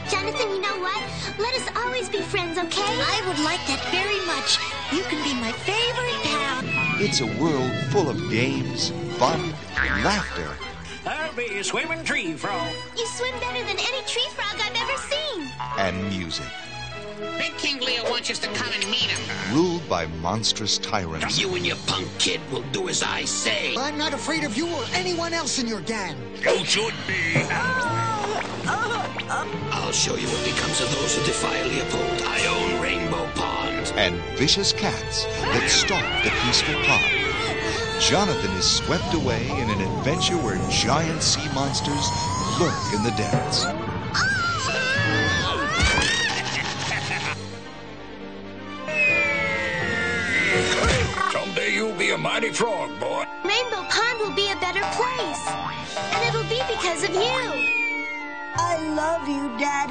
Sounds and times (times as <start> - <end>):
Music: 0.0 - 59.9
Speech: 15.8 - 16.5, 17.6 - 25.2, 29.8 - 37.1, 38.0 - 43.7, 56.1 - 57.6.